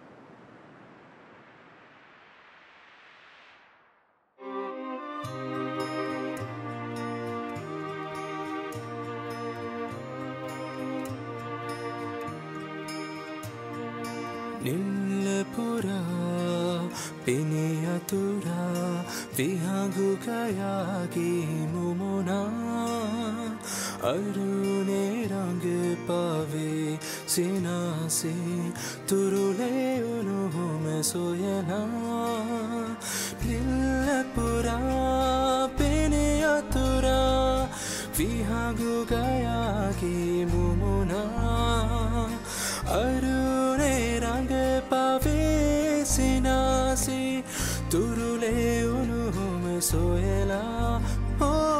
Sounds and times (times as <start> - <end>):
Music: 4.4 - 51.7.